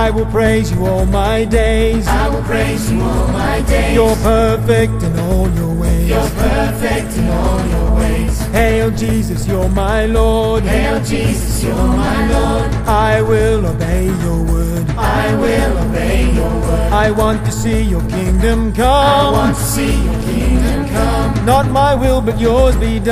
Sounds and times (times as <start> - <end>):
Music: 0.0 - 23.1.